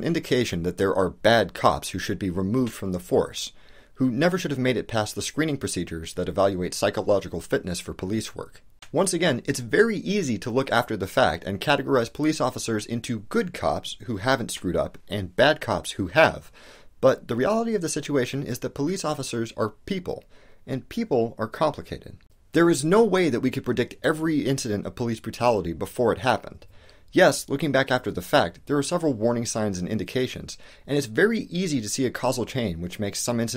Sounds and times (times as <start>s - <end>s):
Speech: 0.0s - 33.5s.